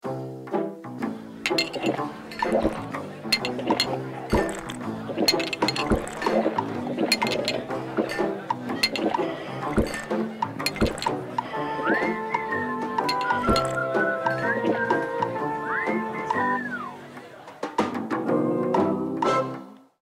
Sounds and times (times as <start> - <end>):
Music: 0.0 - 20.0.